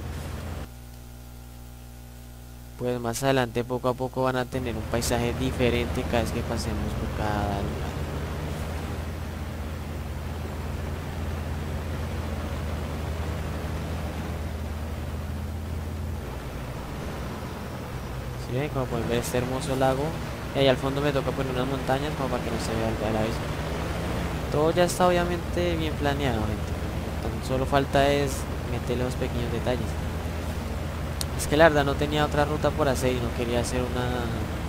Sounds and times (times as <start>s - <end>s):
Bus: 0.0s - 0.8s, 4.4s - 34.6s
Speech: 2.8s - 8.1s, 18.4s - 23.5s, 24.5s - 30.0s, 31.3s - 34.5s.